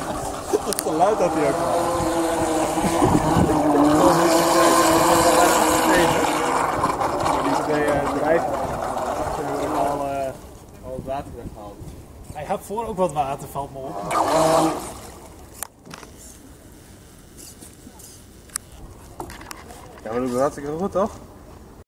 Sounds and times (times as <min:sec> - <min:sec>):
Motorboat, speedboat: 0:00.0 - 0:10.7, 0:13.8 - 0:15.6.